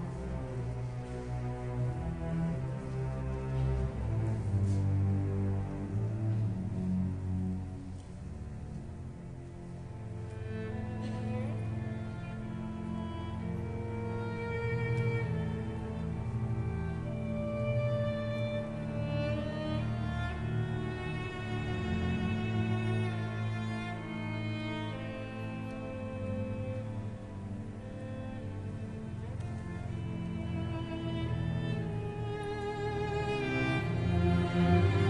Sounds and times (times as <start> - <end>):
Violin, fiddle: 0.0 - 35.0.